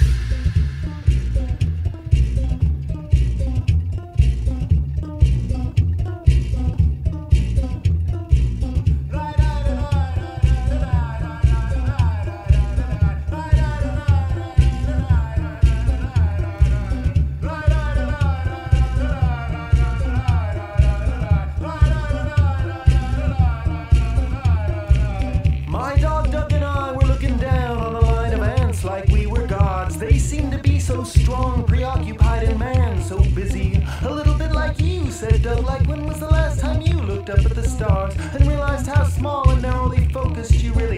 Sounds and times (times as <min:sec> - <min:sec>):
Music: 0:00.0 - 0:40.9.